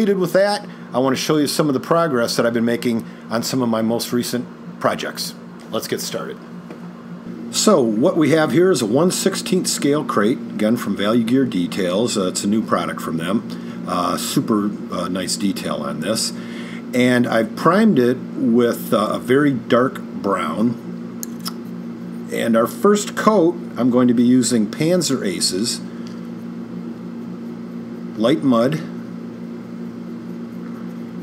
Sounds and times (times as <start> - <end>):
Speech: 0.0 - 6.4, 7.5 - 20.9, 22.3 - 25.9, 28.2 - 29.0.